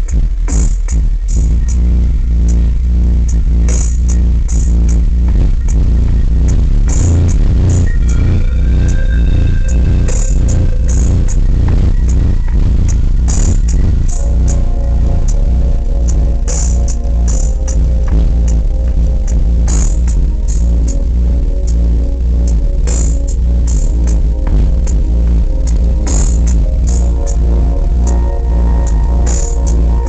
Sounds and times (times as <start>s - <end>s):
Music: 0.0s - 30.0s.